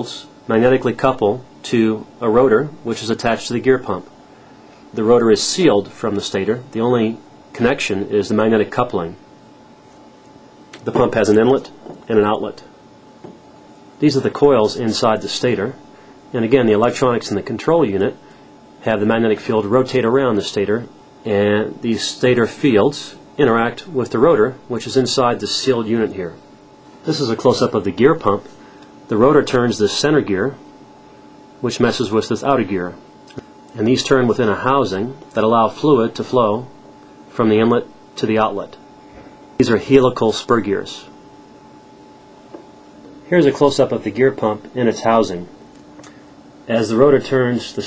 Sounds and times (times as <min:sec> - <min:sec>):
Speech: 0:00.0 - 0:04.1, 0:04.9 - 0:09.2, 0:10.8 - 0:12.7, 0:14.0 - 0:18.2, 0:18.8 - 0:26.4, 0:27.0 - 0:28.5, 0:29.1 - 0:30.7, 0:31.6 - 0:33.1, 0:33.7 - 0:38.9, 0:39.6 - 0:41.2, 0:43.2 - 0:45.6, 0:46.6 - 0:47.8.